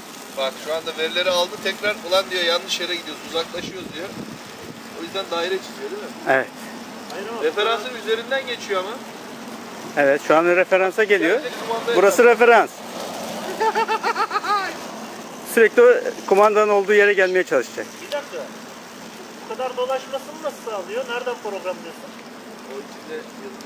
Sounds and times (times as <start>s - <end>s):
Speech: 0.4s - 4.1s, 10.0s - 12.7s, 15.5s - 18.5s, 19.5s - 22.1s.